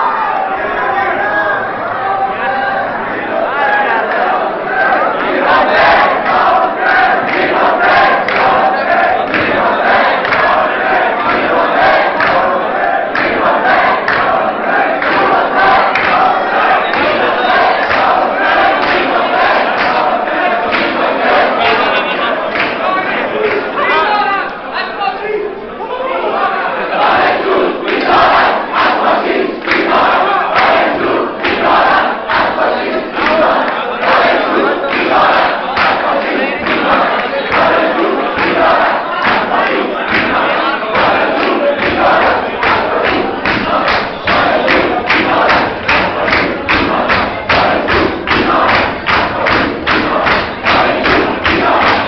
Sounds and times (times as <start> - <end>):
Male speech, man speaking: 21.6 - 26.9.